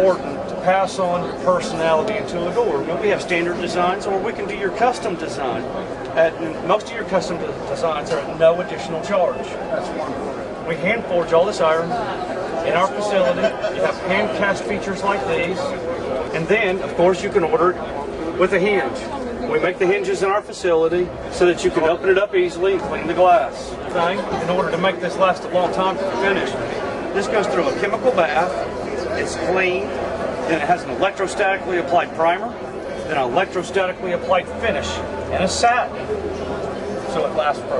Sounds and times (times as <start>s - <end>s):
Speech: 0.0s - 36.3s, 37.0s - 37.8s.